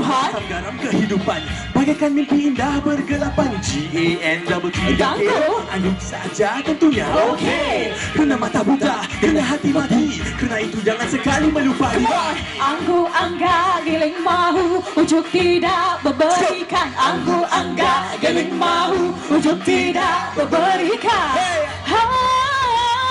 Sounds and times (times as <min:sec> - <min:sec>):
Soundtrack music: 0:00.0 - 0:22.1.